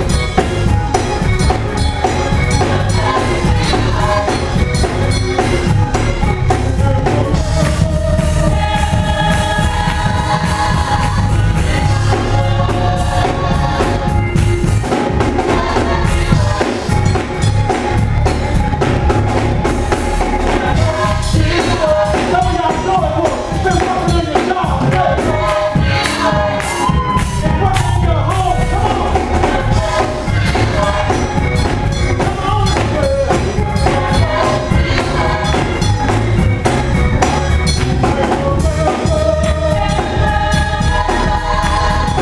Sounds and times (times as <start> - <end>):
Choir: 0.0 - 42.2.